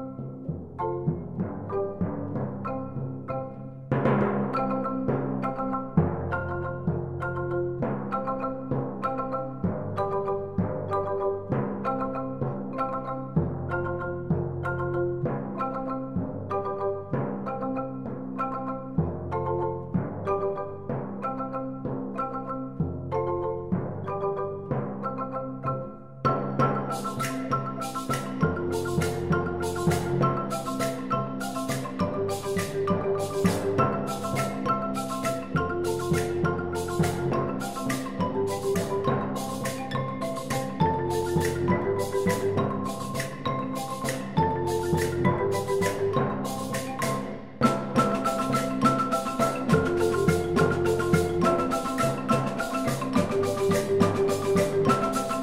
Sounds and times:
Music: 0.0s - 55.4s.

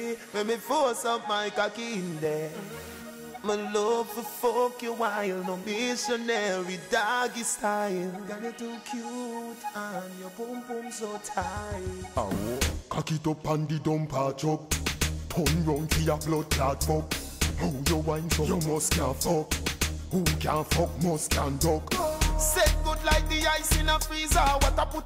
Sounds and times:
Music: 0.0s - 13.7s, 14.4s - 25.0s.

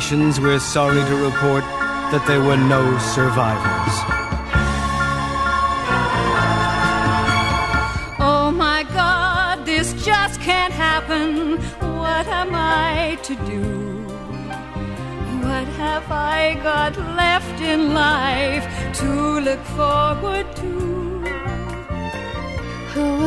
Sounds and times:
Music: 0.0s - 23.2s.

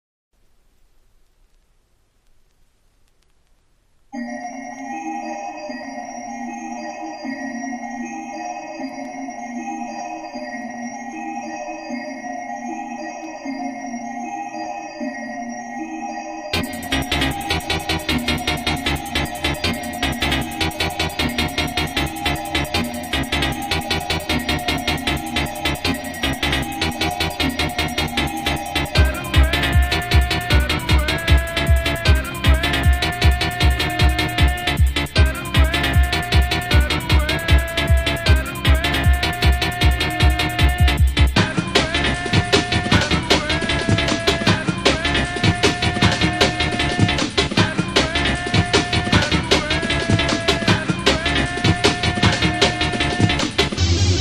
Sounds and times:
Electronic music: 4.2s - 54.2s.

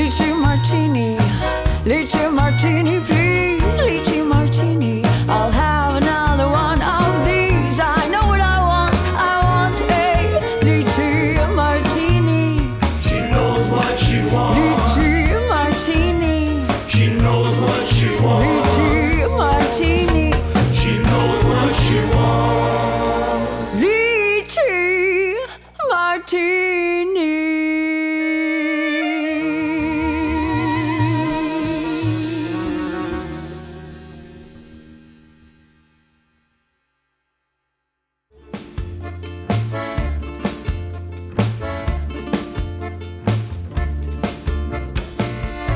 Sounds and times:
Music: 0.0s - 45.7s.

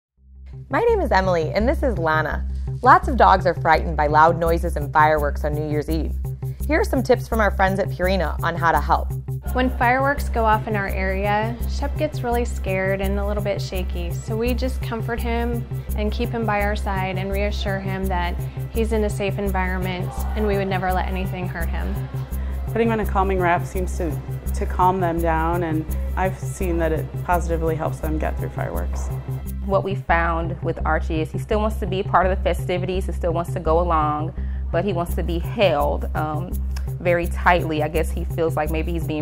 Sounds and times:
Music: 0.2s - 39.2s
Speech: 0.7s - 6.1s, 6.7s - 22.0s, 22.7s - 29.1s, 29.7s - 39.2s.

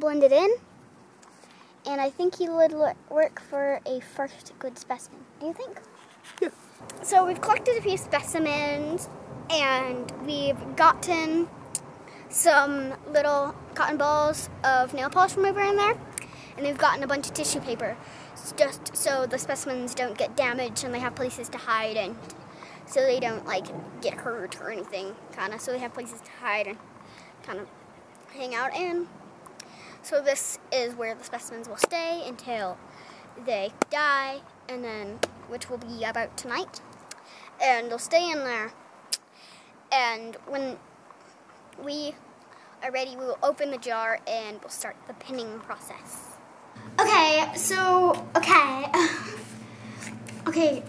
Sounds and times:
Speech: 0.0s - 0.6s, 1.9s - 5.9s, 6.9s - 11.5s, 12.3s - 16.0s, 16.6s - 26.8s, 27.4s - 27.7s, 28.3s - 29.1s, 30.0s - 32.8s, 33.4s - 36.8s, 37.6s - 38.8s, 39.9s - 40.8s, 41.8s - 42.2s, 42.8s - 49.3s, 50.4s - 50.8s.

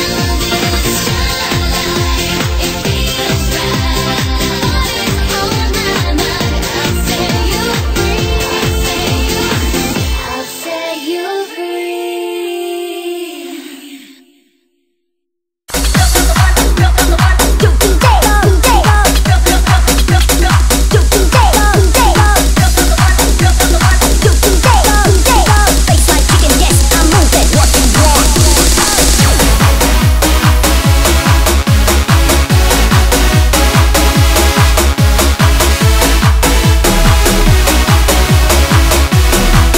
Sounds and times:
Music: 0.0s - 39.7s.

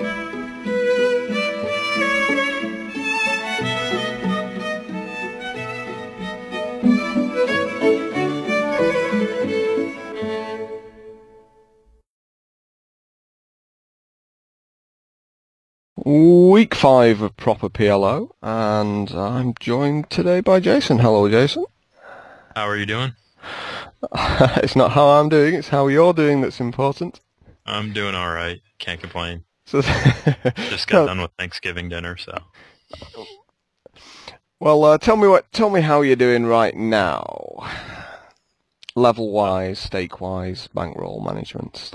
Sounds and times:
Speech: 16.0s - 21.7s, 22.6s - 23.2s, 24.0s - 29.9s, 30.6s - 33.4s, 34.6s - 37.7s, 38.8s - 41.9s.

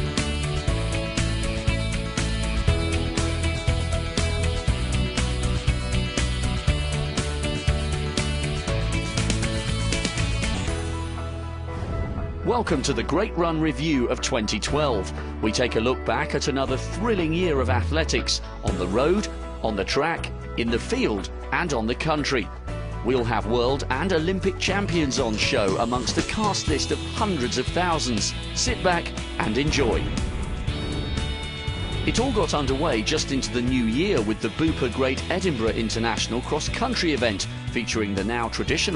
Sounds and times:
Music: 0.0s - 38.9s
Speech: 12.5s - 30.1s, 32.1s - 38.9s.

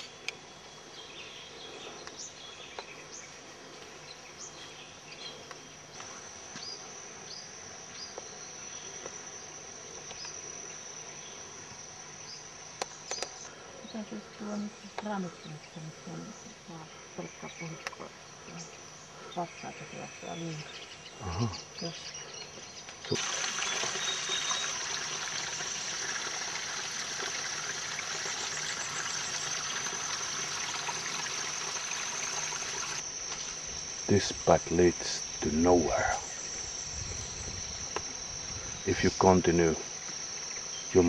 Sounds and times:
Water: 23.0s - 33.1s.

